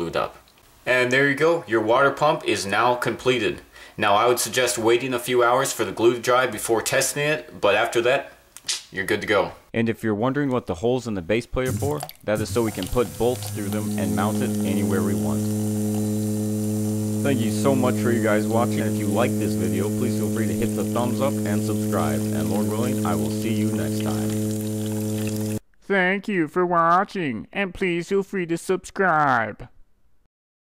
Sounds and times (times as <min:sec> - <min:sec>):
Speech: 0:00.0 - 0:08.3, 0:08.9 - 0:15.4, 0:17.2 - 0:24.4, 0:25.8 - 0:29.8.